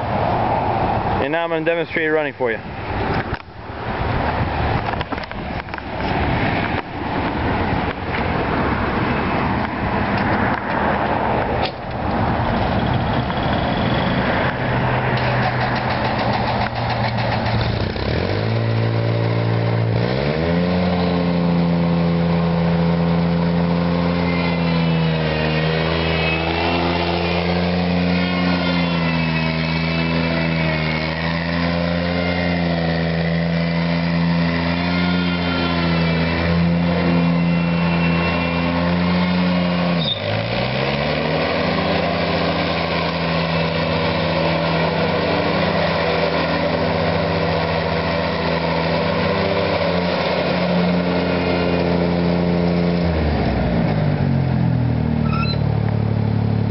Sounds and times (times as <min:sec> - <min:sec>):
Vehicle: 0:00.0 - 0:56.7
Lawn mower: 0:01.2 - 0:56.7.